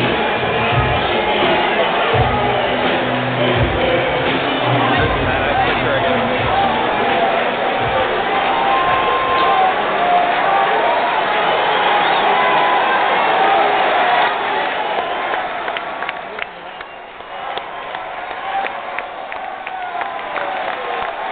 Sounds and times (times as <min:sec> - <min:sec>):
Speech: 0:03.4 - 0:08.3.